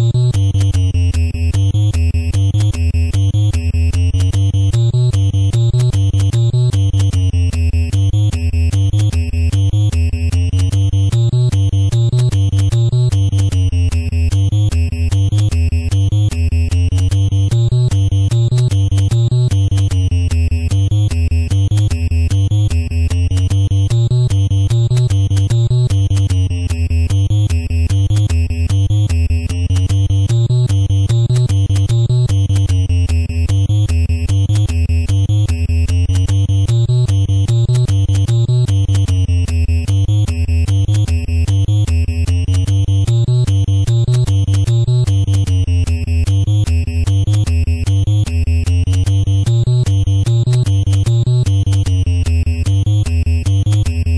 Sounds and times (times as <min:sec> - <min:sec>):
Video game music: 0:00.0 - 0:54.1.